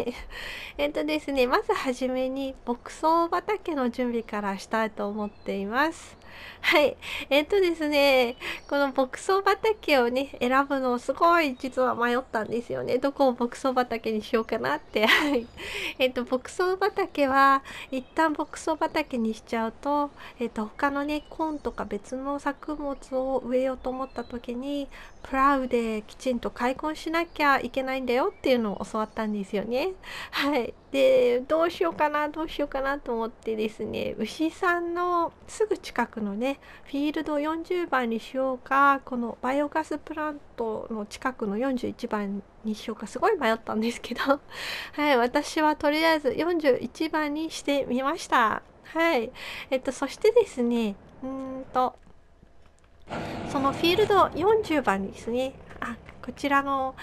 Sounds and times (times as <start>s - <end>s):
Speech: 0.0s - 52.0s, 53.5s - 57.0s.